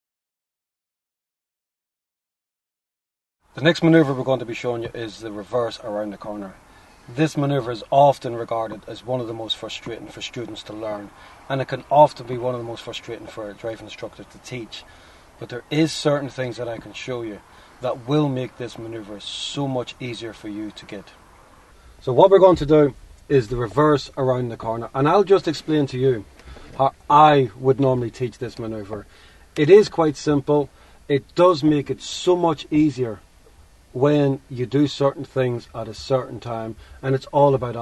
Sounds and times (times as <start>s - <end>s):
Speech: 3.6s - 21.2s, 22.0s - 33.2s, 34.0s - 37.8s.